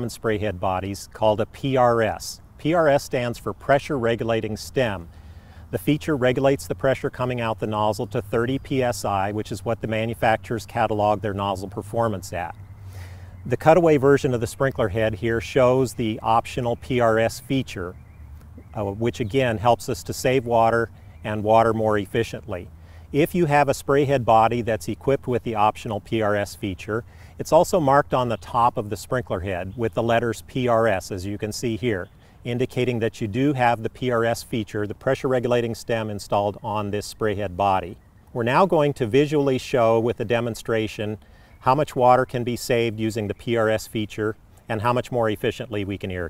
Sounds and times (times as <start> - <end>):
Speech: 0.0 - 5.1, 5.7 - 12.6, 13.5 - 18.0, 18.6 - 46.3.